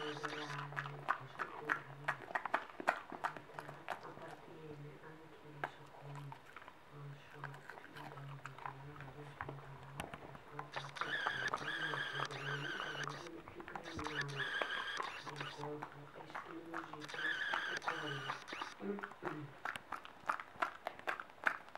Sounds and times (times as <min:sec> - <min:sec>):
Speech: 0:00.0 - 0:02.4, 0:03.3 - 0:14.5, 0:15.1 - 0:19.6
Chewing, mastication: 0:00.0 - 0:21.7.